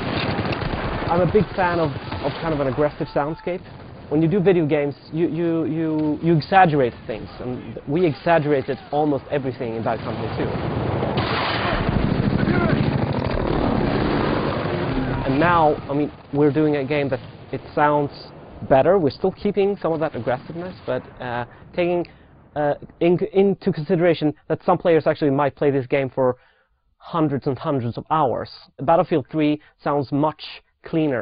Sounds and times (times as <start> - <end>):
Speech: 1.1 - 10.6, 15.2 - 26.4, 27.0 - 31.2.